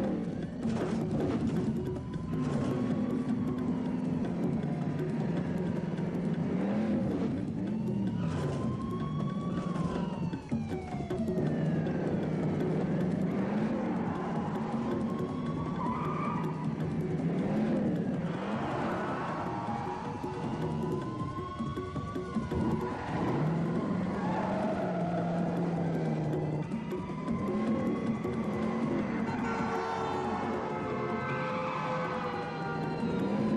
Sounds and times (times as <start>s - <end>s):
Music: 0.0s - 33.5s.